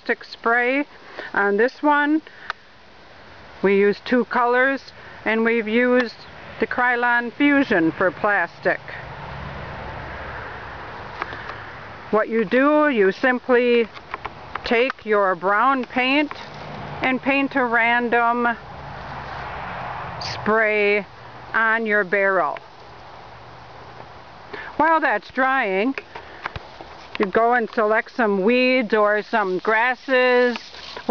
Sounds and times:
Speech: 0.0 - 2.2, 3.6 - 9.0, 12.1 - 13.9, 14.7 - 16.4, 17.0 - 18.6, 20.2 - 22.6, 24.8 - 26.0, 27.2 - 31.1.

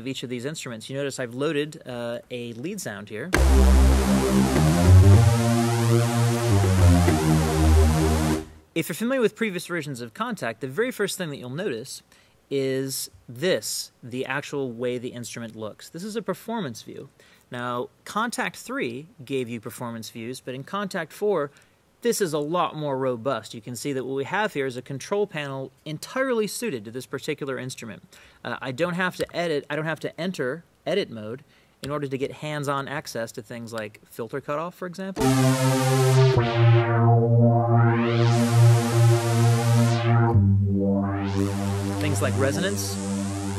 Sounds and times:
Speech: 0.0 - 3.4, 8.8 - 35.2, 42.0 - 43.0
Drum machine: 3.4 - 8.6, 35.2 - 43.5
Sampler: 3.4 - 8.6, 35.2 - 43.5.

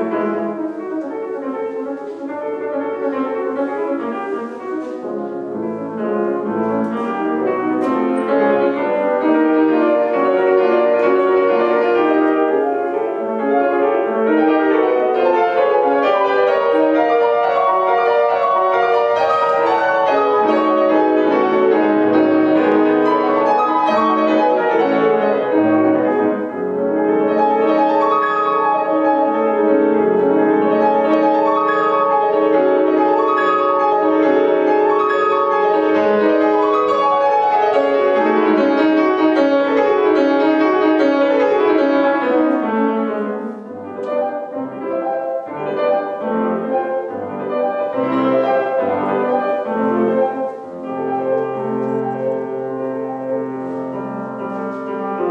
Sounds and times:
Music: 0.0 - 55.3.

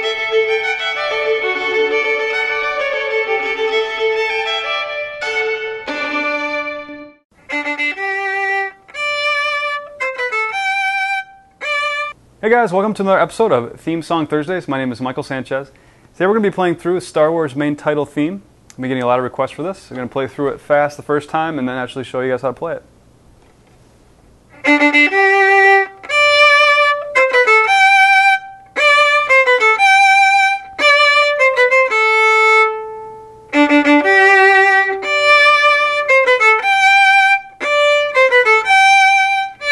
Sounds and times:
Violin, fiddle: 0.0 - 12.2, 24.6 - 39.7.

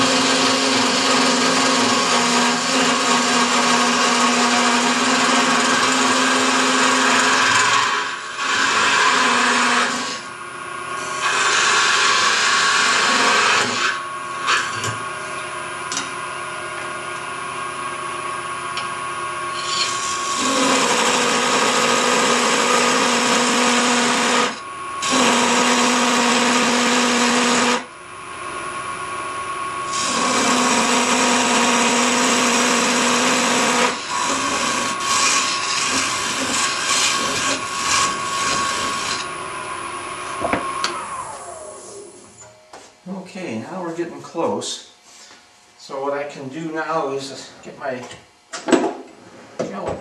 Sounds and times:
Tools: 19.5 - 20.9, 34.1 - 39.3.

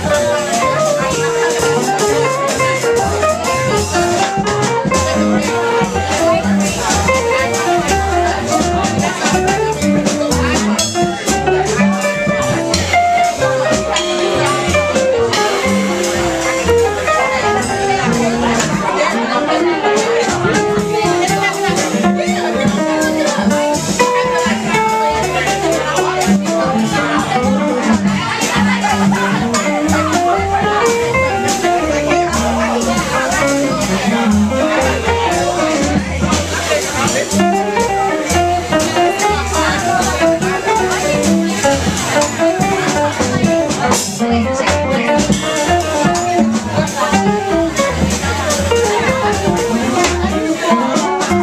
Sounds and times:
Music: 0.0 - 51.4
Speech: 0.0 - 51.4.

